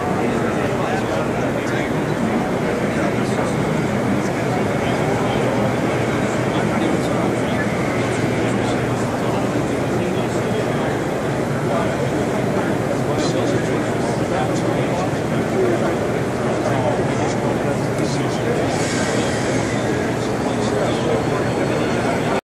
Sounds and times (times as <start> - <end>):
Speech: 0.0 - 22.4.